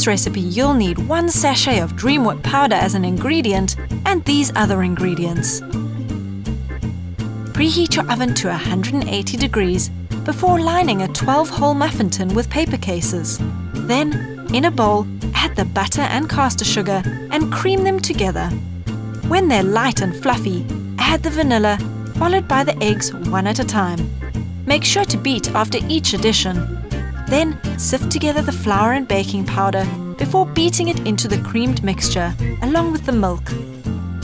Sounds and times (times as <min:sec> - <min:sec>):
Speech: 0:00.0 - 0:05.6, 0:07.6 - 0:18.6, 0:19.3 - 0:24.0, 0:24.7 - 0:26.6, 0:27.3 - 0:33.6
Music: 0:00.0 - 0:34.2.